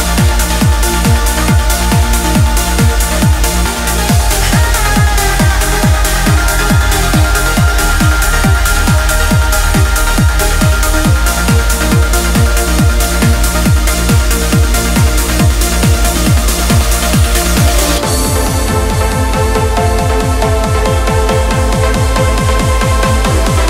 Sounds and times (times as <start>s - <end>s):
Trance music: 0.0s - 23.7s.